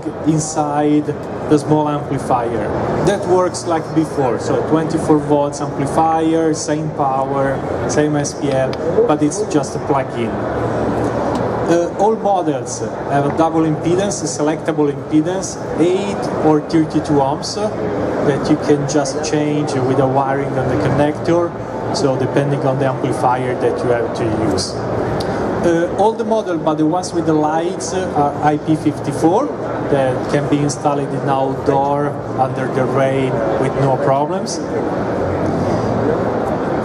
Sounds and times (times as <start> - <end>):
Speech: 0.0 - 10.4, 11.7 - 24.9, 25.6 - 34.9.